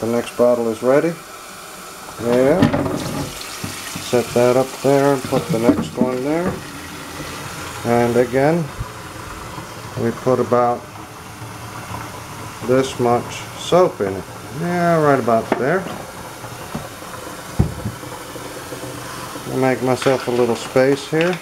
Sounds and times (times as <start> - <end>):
Sink (filling or washing): 0.0 - 21.4
Water: 0.0 - 21.4.